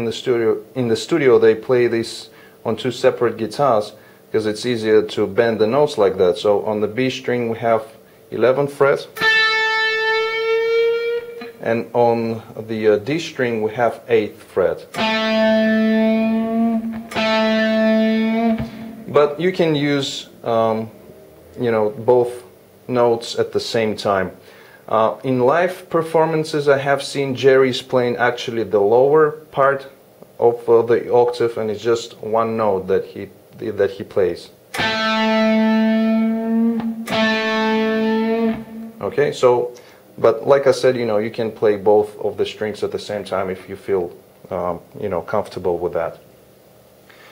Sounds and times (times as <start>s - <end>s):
Speech: 0.0s - 9.2s, 11.6s - 14.9s, 19.1s - 21.0s, 21.6s - 34.6s, 39.0s - 46.3s
Electric guitar: 9.2s - 11.7s, 14.9s - 19.4s, 34.7s - 39.0s.